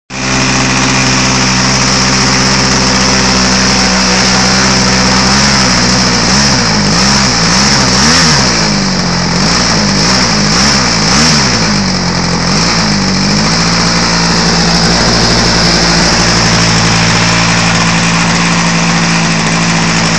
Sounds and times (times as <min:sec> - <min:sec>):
Vehicle: 0:00.1 - 0:20.1.